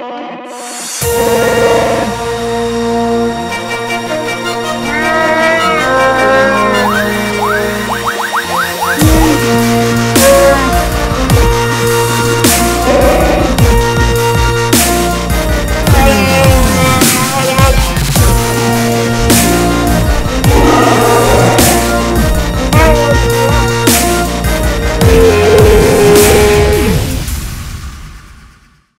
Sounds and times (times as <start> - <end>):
Dubstep: 6.9 - 15.0, 15.8 - 24.2.